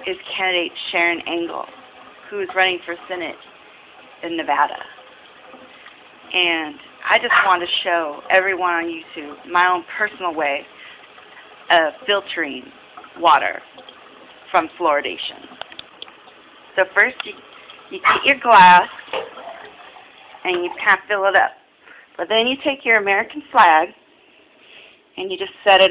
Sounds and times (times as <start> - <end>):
Speech: 0.0 - 1.7, 2.3 - 3.4, 4.2 - 4.9, 6.3 - 10.7, 11.7 - 13.6, 14.6 - 15.5, 16.8 - 17.4, 18.0 - 19.0, 20.5 - 21.6, 22.2 - 24.0, 25.2 - 25.9.